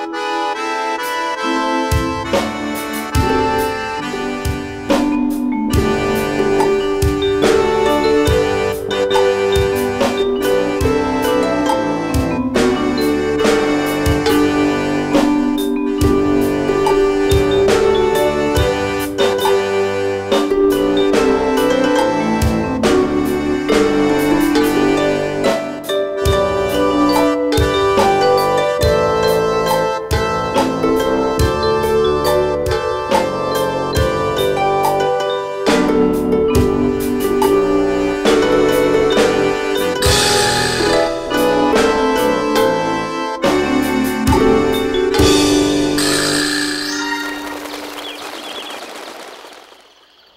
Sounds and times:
Music: 0.0s - 48.6s.

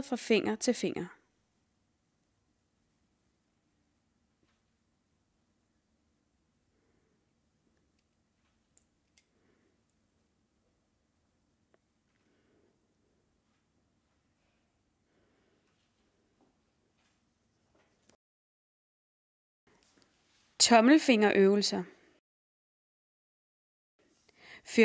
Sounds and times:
Speech: 0.0s - 1.2s, 20.6s - 22.0s.

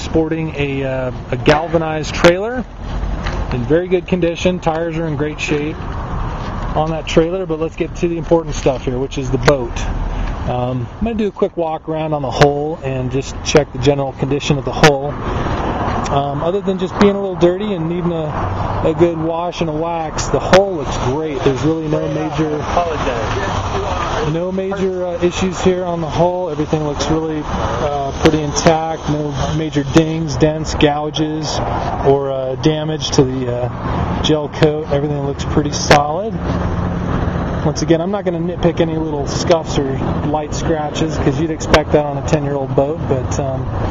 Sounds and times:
Speech: 0.0s - 2.7s, 3.5s - 5.8s, 6.8s - 15.2s, 16.1s - 36.4s, 37.6s - 43.7s.

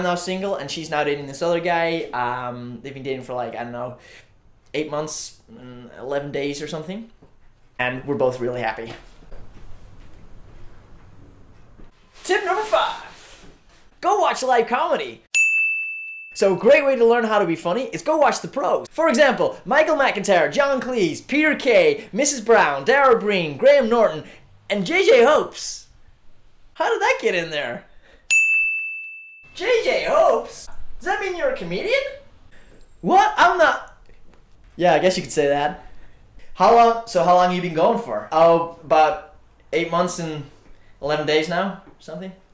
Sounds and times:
Speech: 0.0s - 4.0s, 4.7s - 7.2s, 7.8s - 9.1s, 12.2s - 13.3s, 14.0s - 15.2s, 16.4s - 25.9s, 26.8s - 27.9s, 29.6s - 32.3s, 33.0s - 34.0s, 34.8s - 35.8s, 36.6s - 42.5s.

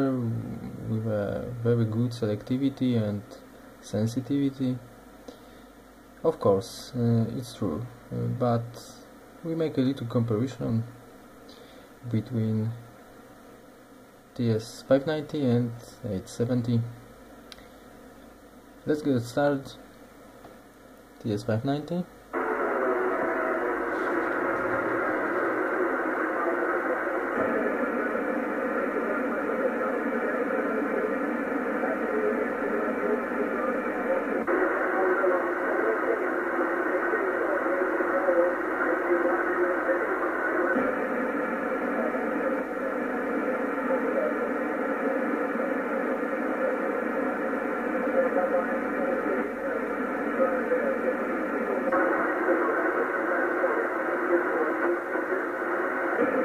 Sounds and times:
Speech: 0.0s - 4.9s, 6.2s - 11.0s, 12.0s - 12.8s, 14.4s - 17.0s, 18.8s - 19.8s, 21.2s - 22.1s, 25.7s - 56.4s.

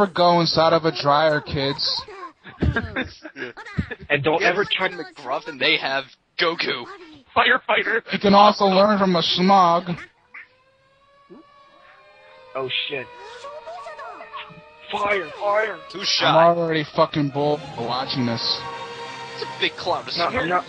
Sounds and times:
Speech: 0.0s - 10.0s, 12.6s - 13.1s, 14.3s - 18.6s, 19.5s - 20.6s.

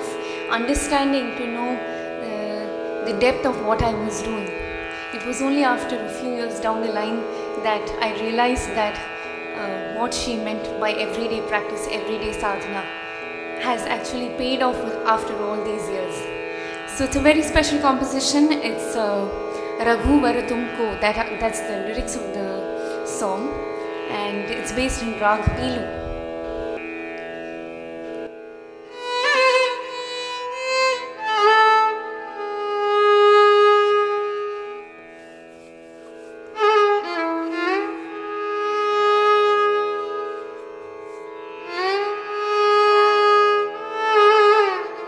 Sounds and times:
Speech: 0.0s - 4.5s, 5.1s - 9.0s, 9.6s - 12.8s, 13.6s - 16.2s, 16.9s - 26.0s.

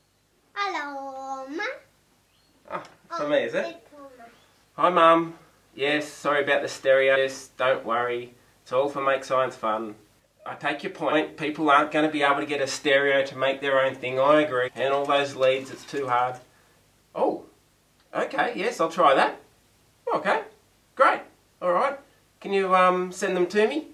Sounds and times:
Speech: 2.7s - 16.5s, 18.1s - 19.4s, 20.1s - 23.9s.

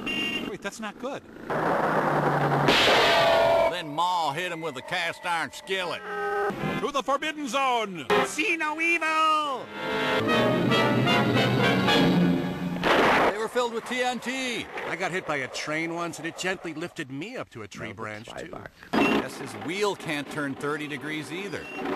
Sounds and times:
Vehicle: 0.0s - 3.7s, 18.2s - 21.9s
Speech: 6.8s - 9.7s, 13.3s - 21.7s
Music: 9.7s - 12.8s.

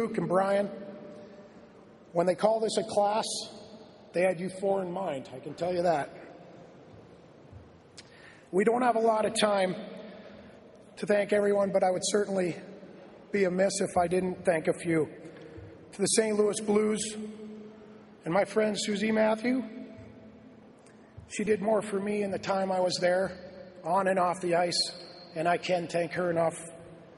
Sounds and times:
Male speech, man speaking: 0.0s - 0.8s, 2.1s - 6.3s, 8.5s - 10.0s, 11.0s - 12.7s, 13.3s - 15.2s, 15.9s - 17.3s, 18.2s - 19.8s, 21.3s - 26.8s
Narration, monologue: 0.0s - 27.1s.

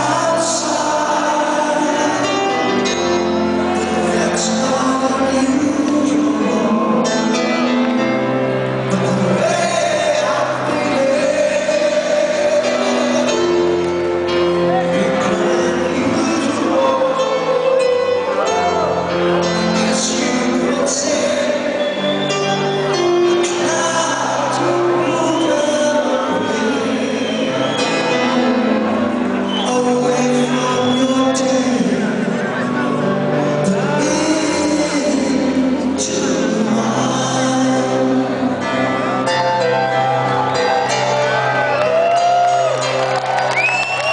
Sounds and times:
Music: 0.0s - 44.1s.

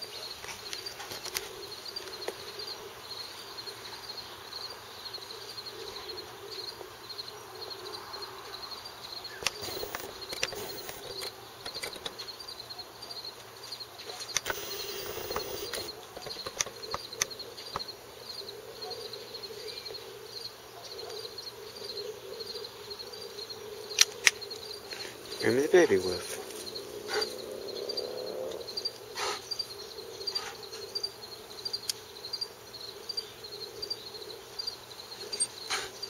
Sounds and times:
Bird: 9.2s - 32.3s.

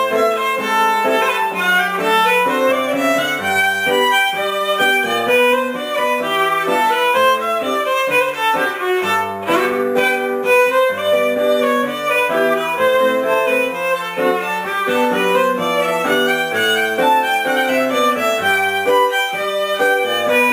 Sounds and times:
Violin, fiddle: 0.0s - 20.5s.

